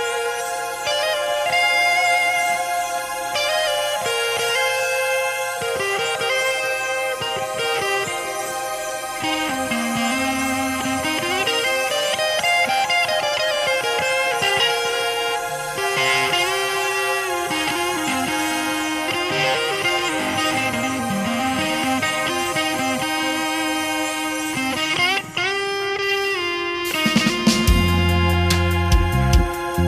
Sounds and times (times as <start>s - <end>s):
Guitar: 0.0s - 29.8s.